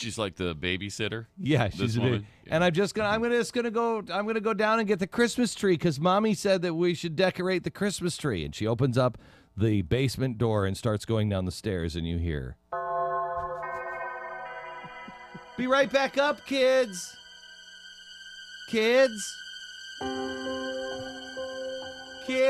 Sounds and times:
Speech: 0.0 - 12.6, 18.7 - 19.4
Music: 12.8 - 22.4.

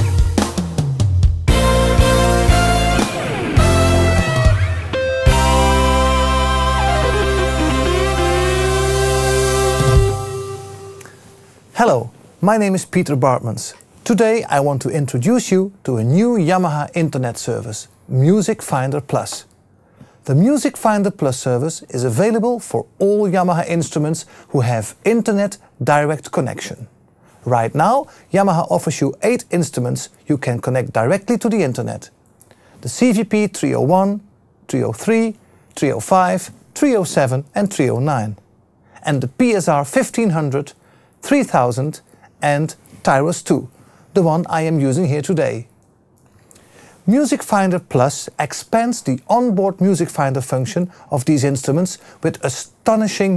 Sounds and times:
Speech: 11.8 - 19.5, 20.2 - 32.2, 32.8 - 38.4, 39.0 - 45.7, 47.1 - 53.3.

